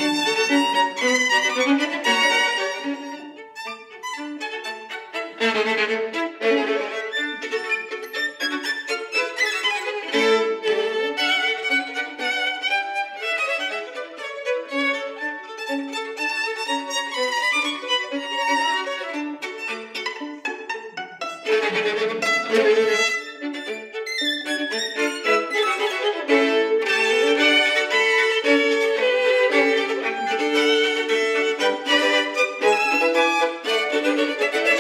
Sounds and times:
Orchestra: 0:00.0 - 0:34.8
Pizzicato: 0:00.0 - 0:34.8
String section: 0:00.0 - 0:34.8.

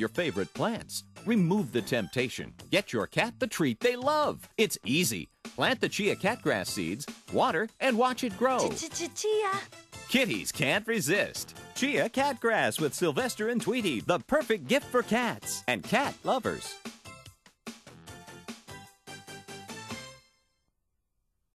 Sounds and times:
Speech: 0:00.0 - 0:16.8
Music: 0:00.0 - 0:20.7.

